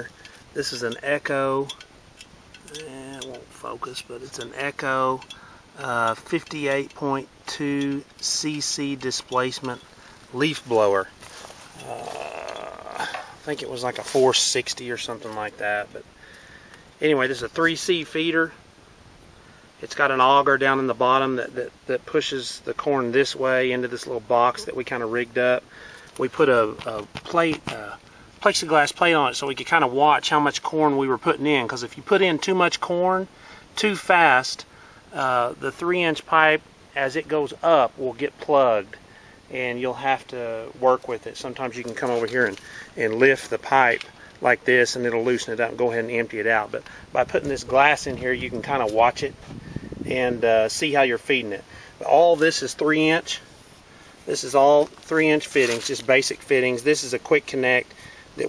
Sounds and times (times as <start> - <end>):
Speech: 0.0 - 1.8, 2.7 - 11.1, 11.8 - 16.1, 17.0 - 18.6, 19.8 - 25.6, 26.2 - 49.4, 50.1 - 53.5, 54.3 - 58.4.